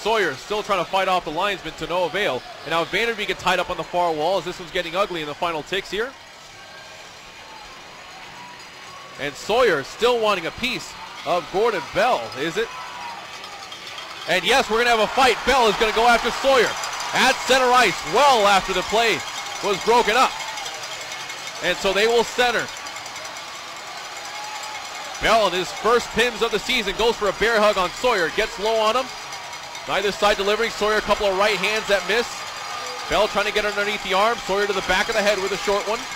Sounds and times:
Speech: 0.0 - 6.1, 9.2 - 12.7, 14.3 - 20.3, 21.6 - 22.7, 25.2 - 29.1, 29.9 - 32.4, 33.1 - 36.1.

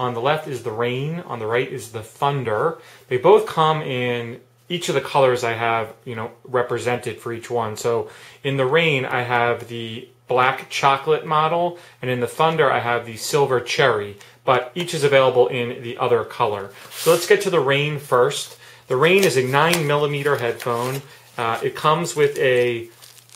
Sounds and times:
Speech: 0.0 - 23.0.

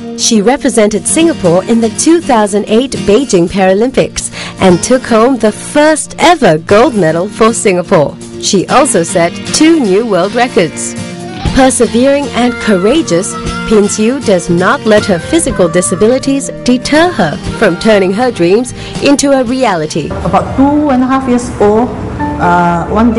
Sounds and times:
Music: 0.0 - 23.1
Female speech, woman speaking: 0.2 - 10.9, 11.6 - 23.1.

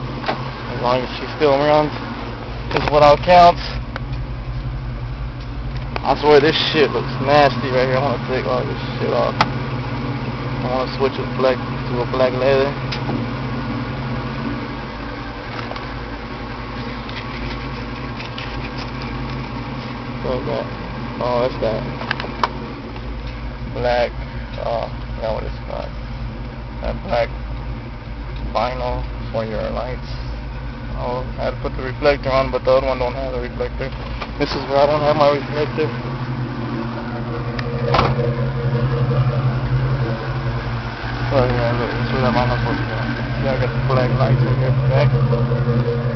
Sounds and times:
Car: 0.0 - 46.1
Speech: 0.7 - 2.0, 2.7 - 3.8, 6.0 - 9.4, 10.6 - 12.8, 20.2 - 22.0, 23.8 - 26.0, 26.8 - 27.3, 28.5 - 30.3, 31.0 - 36.0, 41.3 - 45.2.

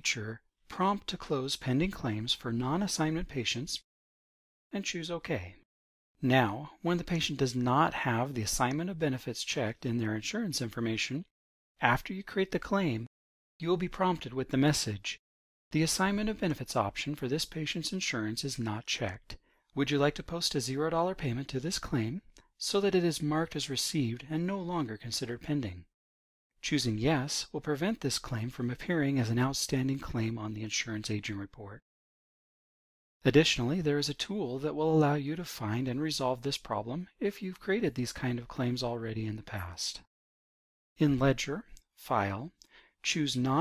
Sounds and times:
Speech: 0.0 - 3.9, 4.7 - 5.6, 6.2 - 25.9, 26.6 - 31.8, 33.2 - 40.1, 41.0 - 43.6.

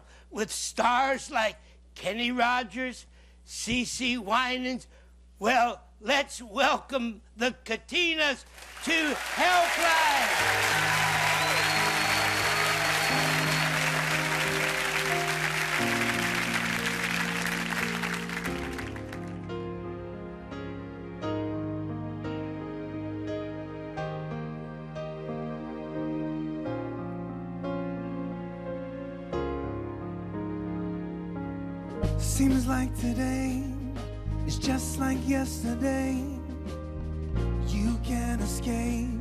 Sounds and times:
Speech: 0.3 - 10.3
Music: 8.8 - 39.2.

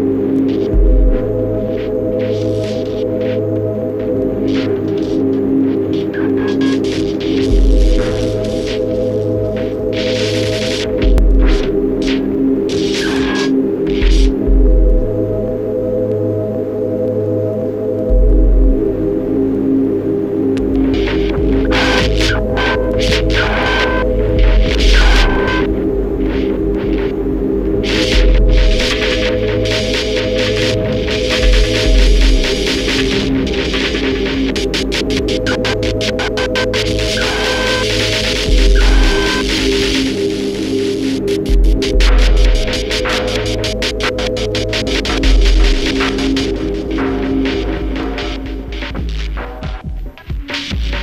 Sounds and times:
Music: 0.0 - 51.0.

